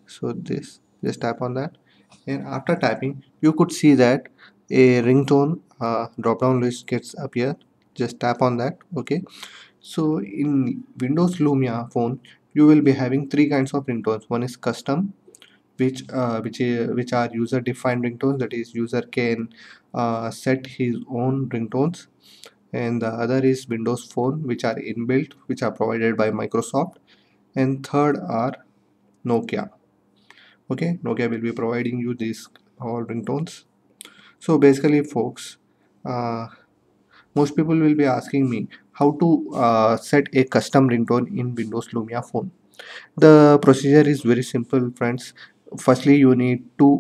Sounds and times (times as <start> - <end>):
Speech: 0.0 - 15.2, 15.8 - 27.0, 27.6 - 29.8, 30.7 - 33.7, 34.4 - 36.6, 37.3 - 47.0.